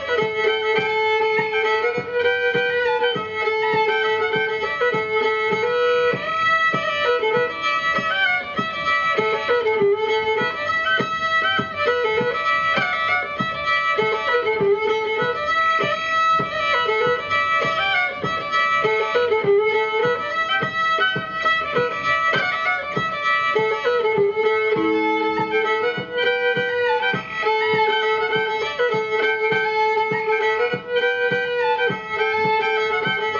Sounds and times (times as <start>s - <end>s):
Violin, fiddle: 0.0s - 33.3s.